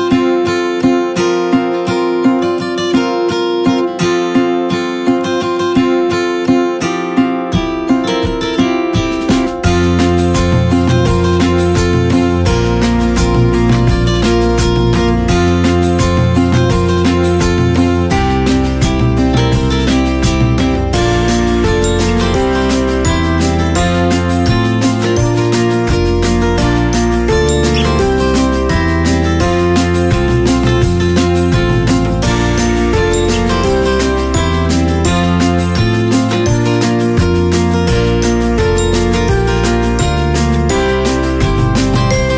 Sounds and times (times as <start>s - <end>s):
Music: 0.0s - 42.3s.